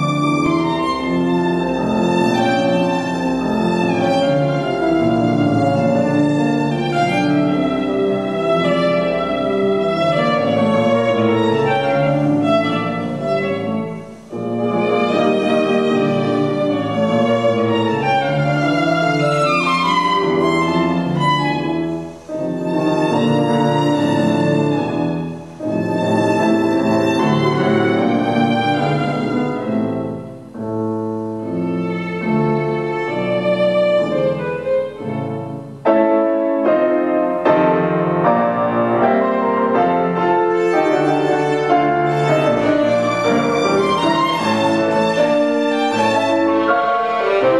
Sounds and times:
Violin, fiddle: 0.0s - 36.3s, 37.4s - 47.5s.

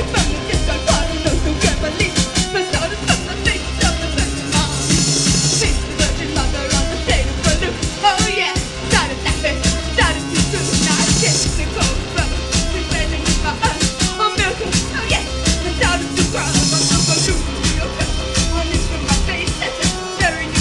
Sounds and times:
Music: 0.0s - 20.6s.

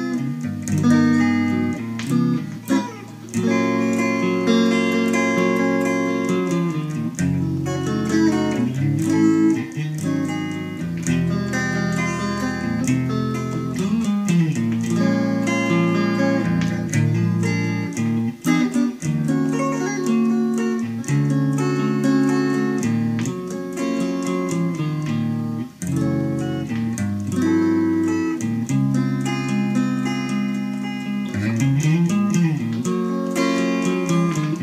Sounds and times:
Steel guitar, slide guitar: 0.0s - 34.6s.

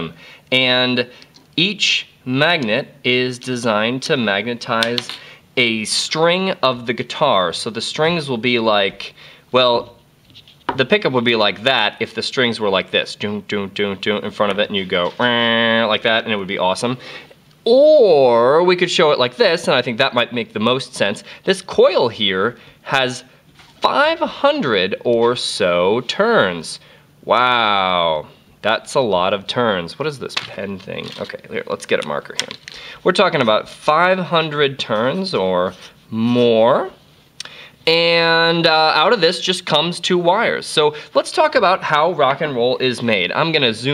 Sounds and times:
Speech: 0.0s - 10.0s, 10.7s - 17.0s, 17.7s - 37.0s, 37.8s - 43.9s.

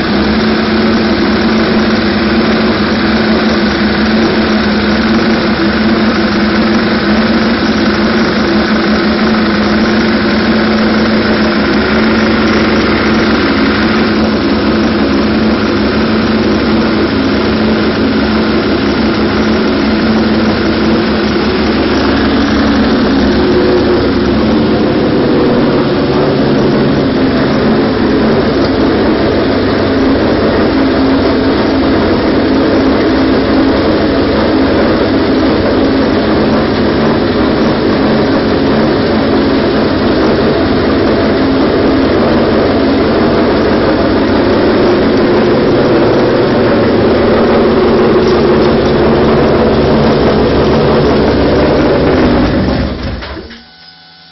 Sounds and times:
Idling: 0.0s - 53.7s
Heavy engine (low frequency): 0.0s - 54.3s
Vehicle: 0.0s - 54.3s.

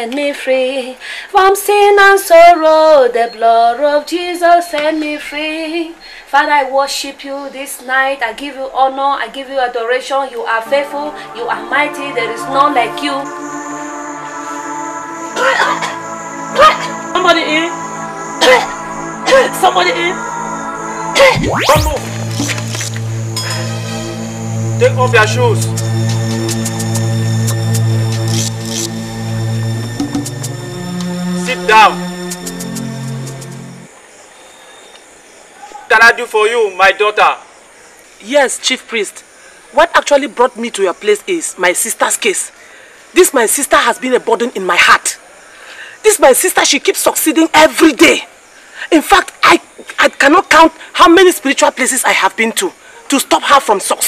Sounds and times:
Scary music: 10.6s - 33.9s.

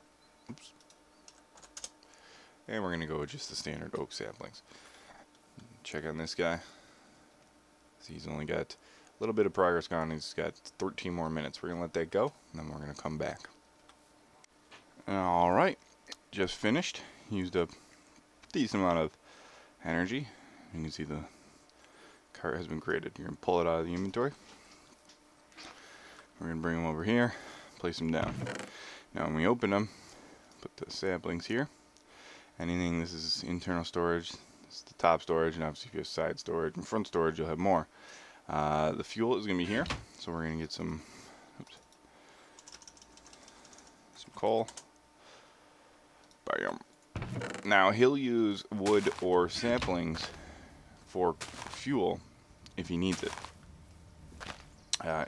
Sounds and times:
Computer keyboard: 0.8s - 2.0s, 42.6s - 43.9s.

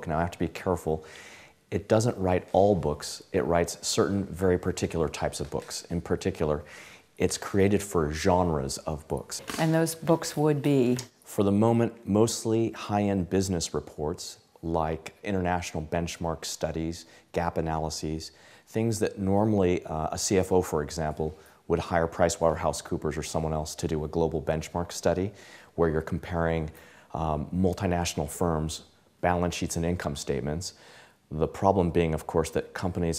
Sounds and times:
Speech: 0.0s - 1.1s, 1.7s - 33.1s.

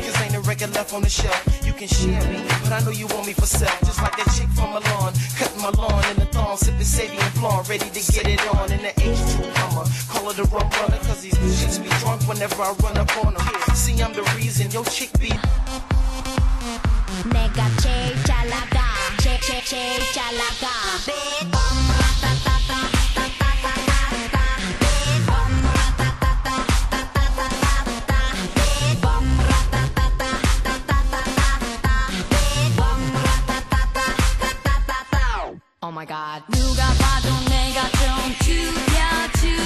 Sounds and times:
Music: 0.0s - 39.6s.

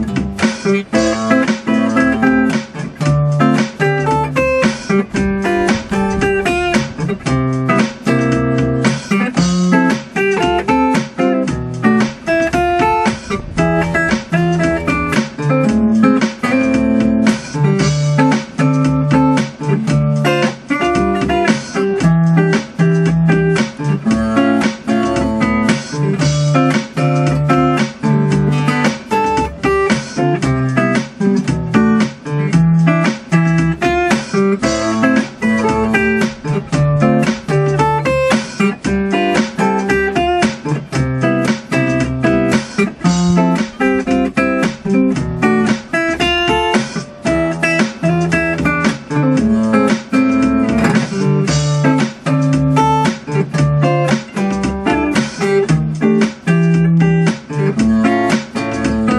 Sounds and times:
Electric guitar: 0.0s - 59.1s
Strum: 0.0s - 59.1s.

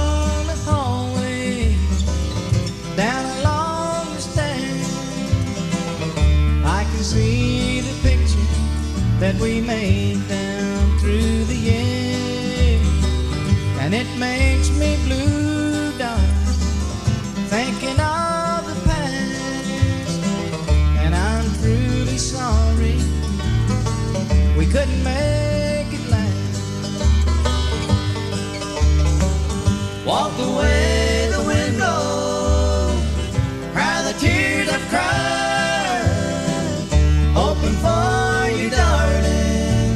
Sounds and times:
Bluegrass: 0.0s - 39.9s.

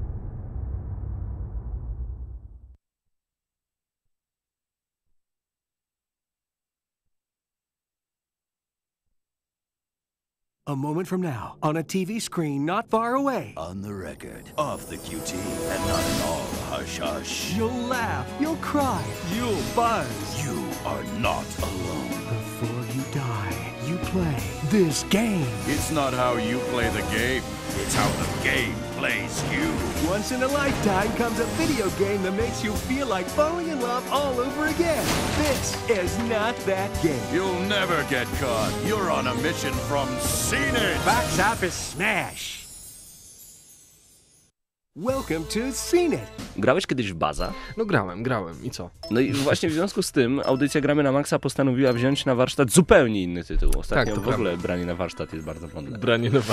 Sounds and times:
Speech: 10.7s - 42.6s, 45.0s - 56.5s
Music: 11.1s - 56.5s.

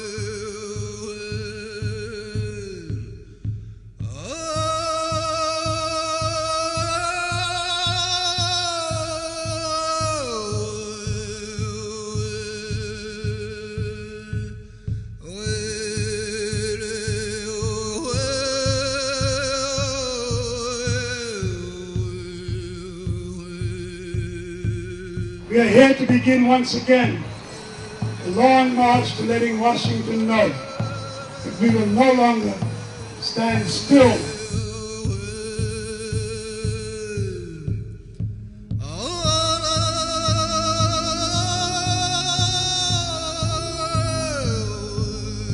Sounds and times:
Music: 0.0s - 45.5s
Speech: 25.4s - 27.3s, 28.3s - 34.5s.

